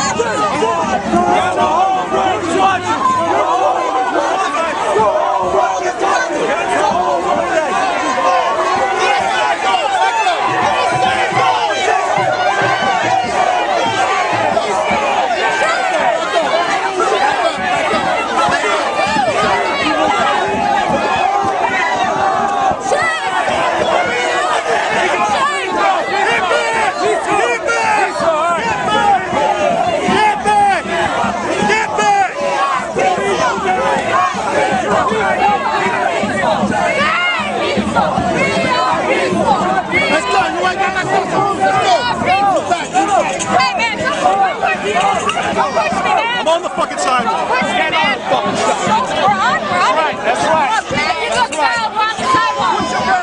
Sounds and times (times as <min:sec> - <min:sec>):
Speech: 0:00.0 - 0:53.2.